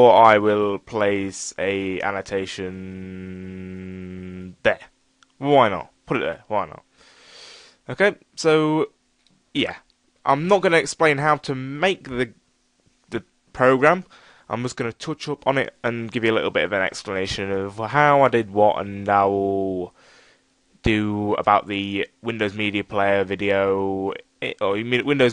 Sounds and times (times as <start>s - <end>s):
Speech: 0.0s - 6.8s, 7.9s - 9.0s, 9.6s - 12.4s, 13.1s - 19.9s, 20.8s - 25.3s.